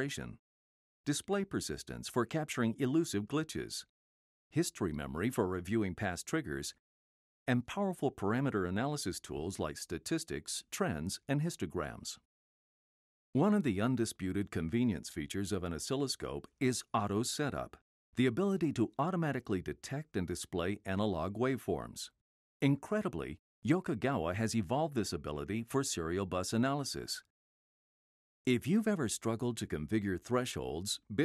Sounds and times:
Speech: 0.0s - 0.4s, 1.1s - 3.9s, 4.5s - 6.8s, 7.5s - 12.3s, 13.4s - 27.3s, 28.5s - 31.2s.

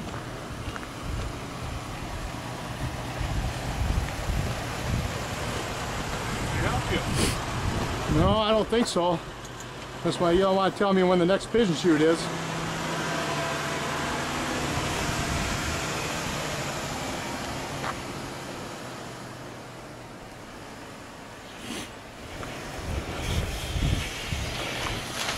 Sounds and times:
Speech: 6.5s - 7.2s, 8.1s - 9.2s, 10.0s - 12.3s.

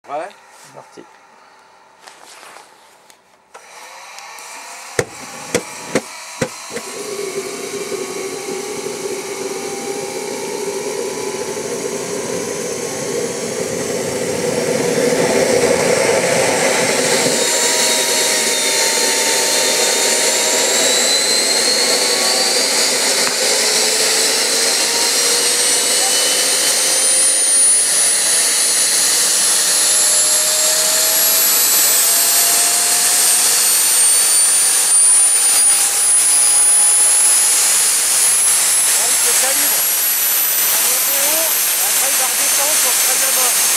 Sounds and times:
Speech: 0.0s - 1.1s, 39.0s - 39.9s, 40.6s - 43.7s.

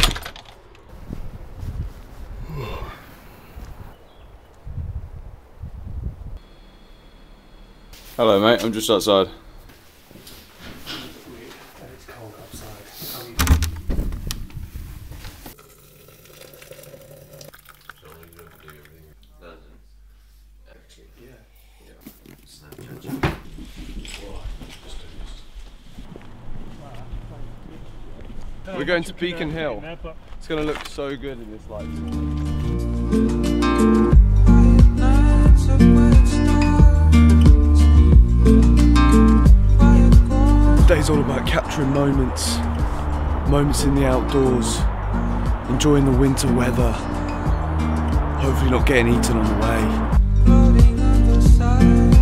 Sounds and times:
Speech: 8.2s - 9.4s, 11.0s - 13.4s, 18.0s - 19.9s, 20.6s - 25.4s, 40.8s - 42.6s, 43.5s - 44.8s, 45.7s - 47.0s, 48.4s - 50.0s.

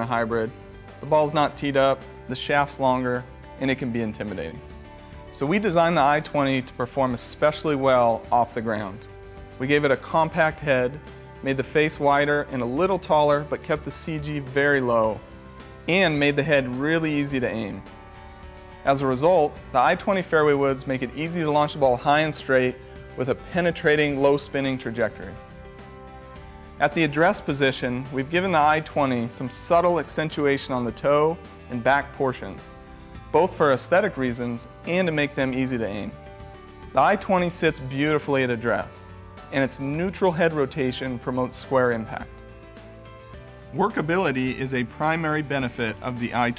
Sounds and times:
Speech: 0.0s - 4.6s, 5.4s - 15.2s, 15.9s - 17.9s, 18.9s - 25.4s, 26.8s - 32.7s, 33.3s - 36.2s, 37.0s - 42.4s, 43.8s - 46.5s
Music: 0.0s - 46.5s.

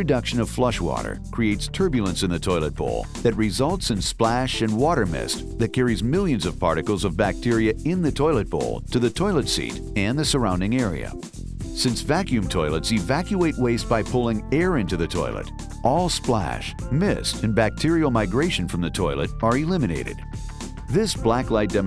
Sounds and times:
Speech: 0.0s - 11.2s, 11.8s - 20.2s, 20.9s - 21.8s
Music: 0.0s - 21.8s.

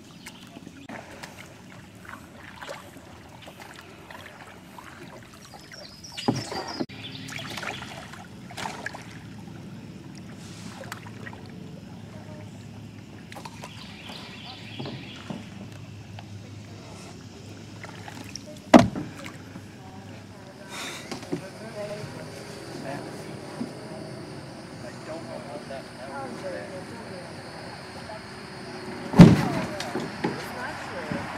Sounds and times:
Rowboat, canoe, kayak: 0.0s - 31.3s.

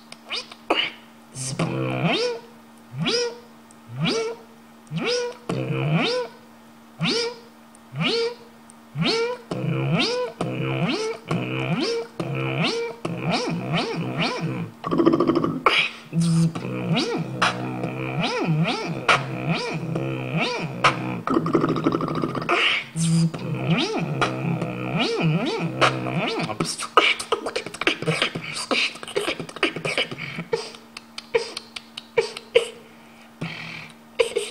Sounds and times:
Beatboxing: 0.0s - 6.4s, 7.0s - 32.8s, 33.4s - 34.5s
Inside, small room: 0.0s - 34.5s.

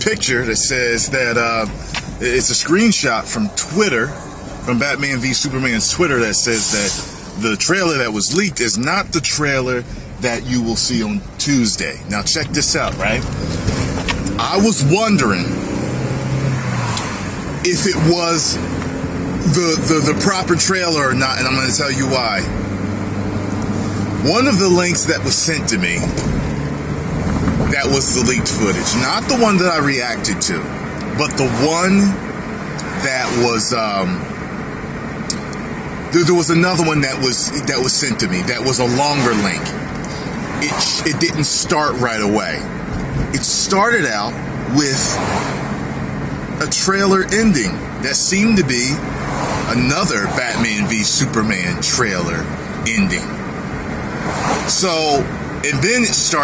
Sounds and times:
Speech: 0.0s - 4.1s, 4.7s - 13.2s, 14.4s - 15.5s, 17.6s - 18.6s, 19.4s - 22.5s, 24.2s - 26.1s, 27.7s - 32.2s, 32.8s - 34.2s, 36.1s - 39.8s, 40.6s - 42.7s, 43.4s - 45.2s, 46.6s - 49.0s, 49.7s - 53.4s, 54.7s - 56.4s
Motor vehicle (road): 0.0s - 56.4s.

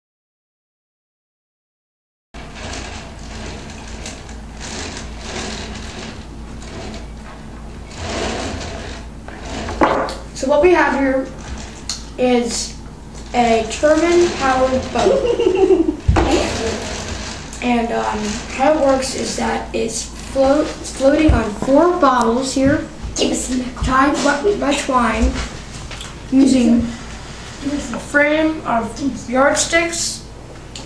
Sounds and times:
Speech: 10.4s - 11.4s, 12.2s - 15.4s, 16.2s - 25.5s, 26.3s - 27.0s, 27.6s - 30.3s.

